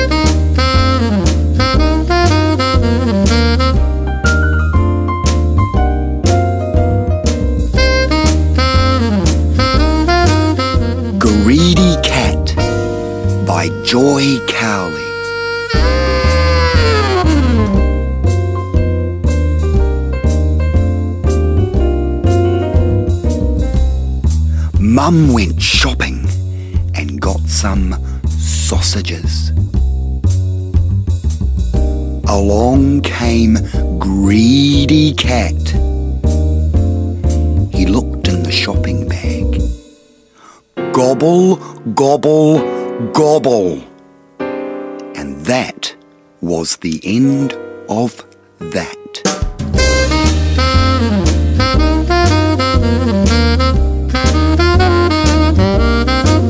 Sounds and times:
Music: 0.0s - 56.4s
Speech: 11.2s - 12.7s, 13.4s - 15.1s, 24.7s - 29.6s, 32.2s - 35.8s, 37.8s - 39.7s, 40.9s - 43.9s, 45.1s - 49.3s.

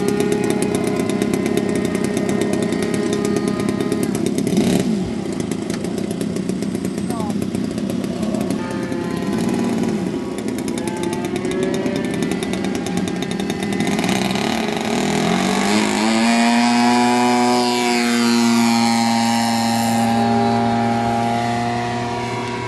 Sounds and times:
Heavy engine (low frequency): 0.0s - 22.6s.

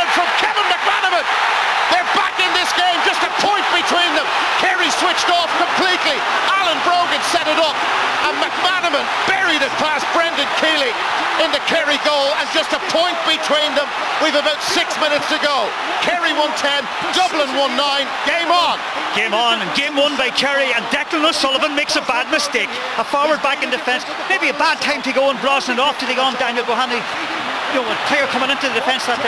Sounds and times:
Speech: 0.0s - 29.2s.

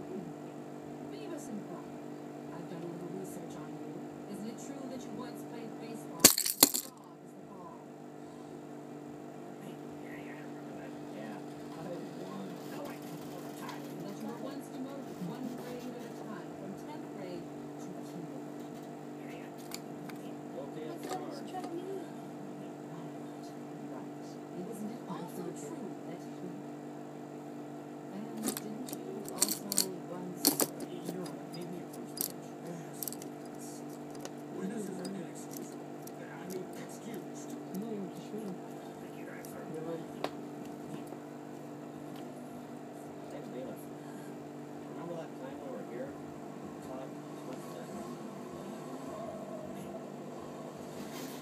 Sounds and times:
Speech: 1.1s - 7.9s, 9.6s - 18.6s, 19.2s - 26.7s, 28.1s - 41.1s, 43.2s - 50.0s.

